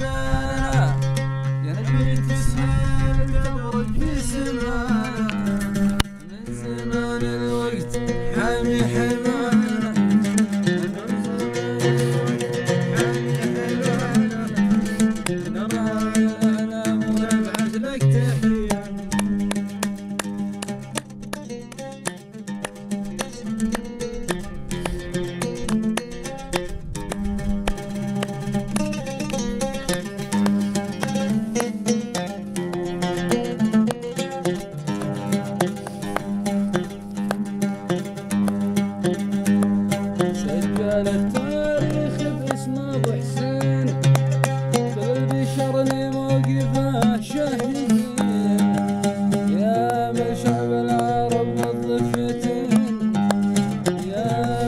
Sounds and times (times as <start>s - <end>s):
Music: 0.0s - 54.6s.